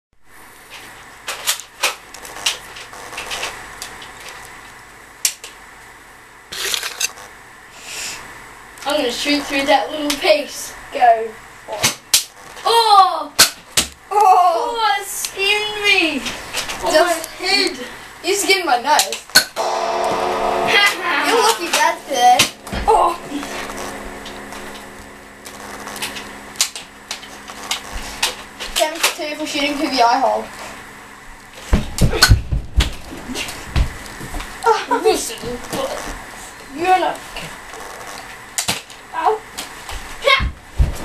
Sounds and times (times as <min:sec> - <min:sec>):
Speech: 0:08.8 - 0:12.0, 0:12.6 - 0:13.4, 0:14.1 - 0:19.2, 0:20.7 - 0:23.5, 0:28.8 - 0:30.5, 0:34.7 - 0:37.5.